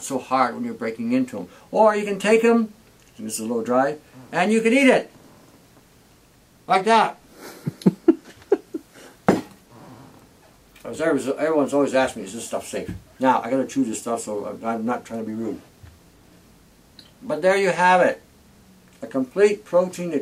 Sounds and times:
Speech: 0:00.0 - 0:05.1, 0:06.7 - 0:07.2, 0:10.8 - 0:15.7, 0:17.2 - 0:18.2, 0:19.0 - 0:20.2
Inside, small room: 0:00.0 - 0:20.2.

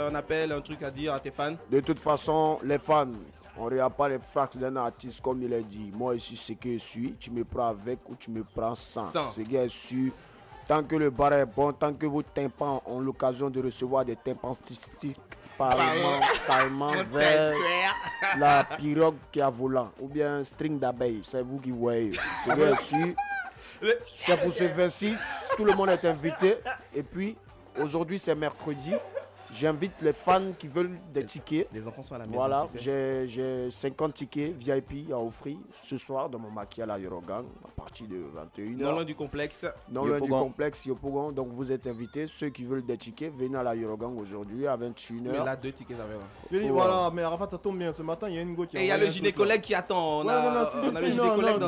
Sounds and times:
Speech: 0:00.0 - 0:23.2, 0:23.8 - 0:51.6.

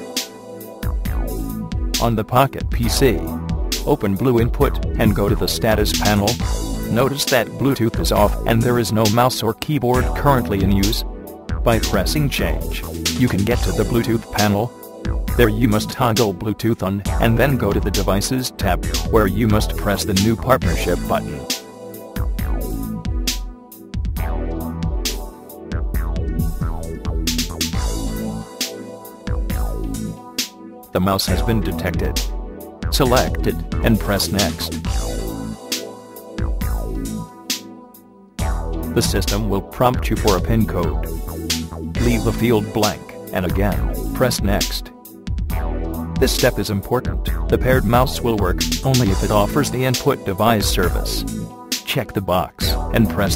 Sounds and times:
Music: 0:00.0 - 0:53.3
Speech: 0:02.0 - 0:03.3, 0:03.9 - 0:11.0, 0:11.7 - 0:14.7, 0:15.4 - 0:21.5, 0:31.0 - 0:32.2, 0:32.9 - 0:34.8, 0:39.0 - 0:41.1, 0:42.0 - 0:44.9, 0:46.2 - 0:51.3, 0:51.9 - 0:53.3.

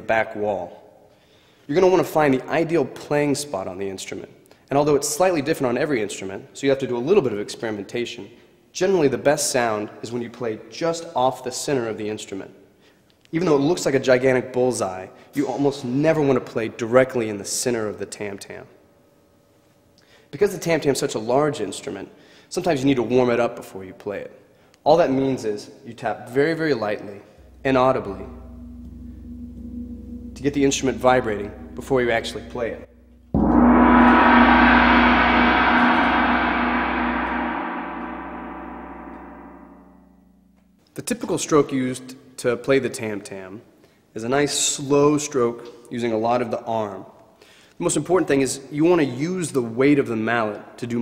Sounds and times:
Speech: 0:00.0 - 0:00.9, 0:01.7 - 0:12.6, 0:13.3 - 0:18.8, 0:20.3 - 0:28.4, 0:30.4 - 0:32.9, 0:41.0 - 0:47.1, 0:47.8 - 0:51.0.

